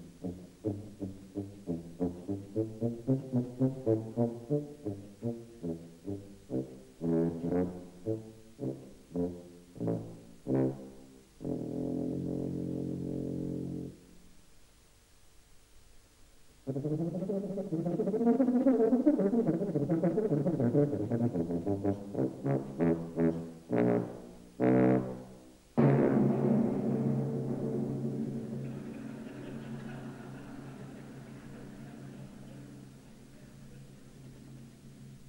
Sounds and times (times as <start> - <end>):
Timpani: 0.0 - 14.2, 16.6 - 35.2.